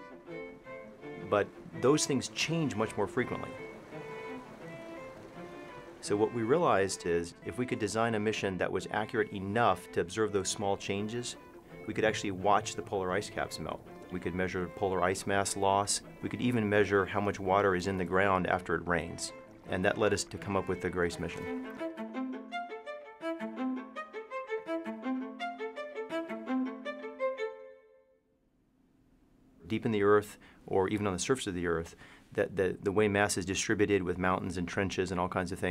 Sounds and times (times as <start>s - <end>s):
Music: 0.0s - 28.3s
Speech: 1.2s - 3.6s, 6.0s - 21.6s, 29.6s - 35.7s.